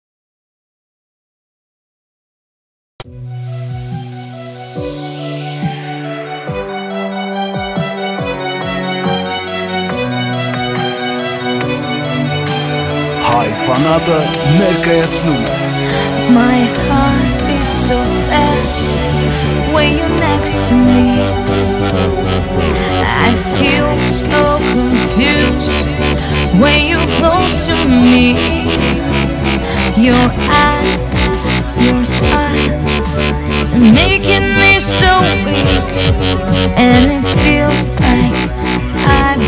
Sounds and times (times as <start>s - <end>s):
Dubstep: 13.2s - 39.4s.